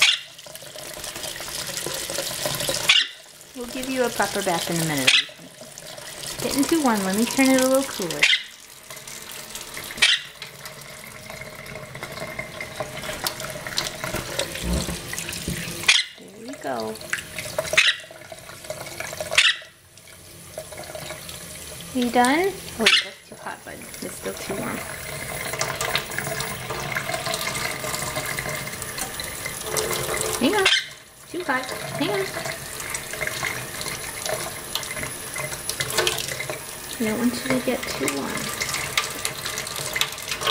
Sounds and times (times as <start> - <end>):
Sink (filling or washing): 0.0 - 40.5
Water: 0.0 - 40.5
Water tap, faucet: 0.0 - 40.5.